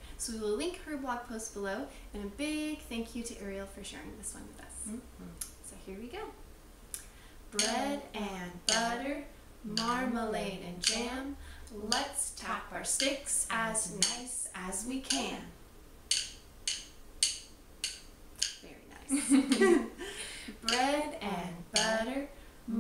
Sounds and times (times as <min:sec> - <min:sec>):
Speech: 0:00.2 - 0:06.4, 0:07.6 - 0:15.6, 0:18.6 - 0:19.4, 0:20.6 - 0:22.8.